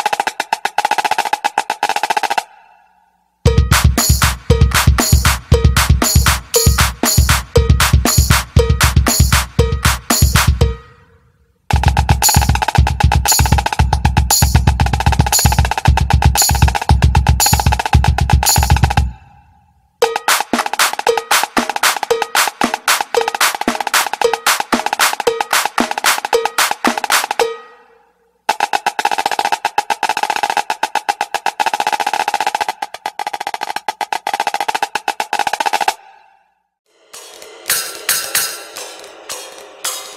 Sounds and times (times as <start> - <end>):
Percussion: 0.0 - 2.6, 3.4 - 36.1, 36.9 - 40.1.